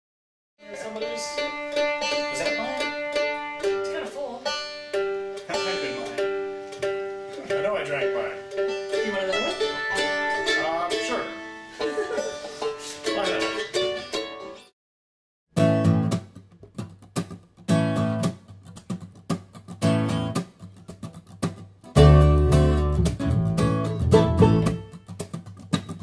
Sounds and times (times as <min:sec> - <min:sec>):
Banjo: 0:00.6 - 0:14.7, 0:22.0 - 0:26.0
Guitar: 0:00.6 - 0:14.7, 0:15.6 - 0:26.0
Speech: 0:05.5 - 0:06.2, 0:07.4 - 0:08.4, 0:09.0 - 0:11.4, 0:13.1 - 0:13.6.